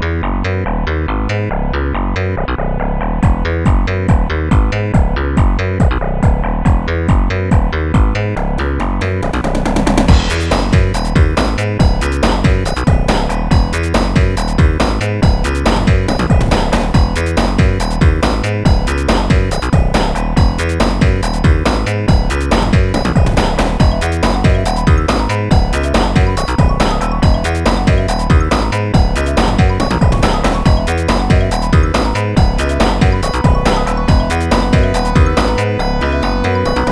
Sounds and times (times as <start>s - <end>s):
Music: 0.0s - 36.9s.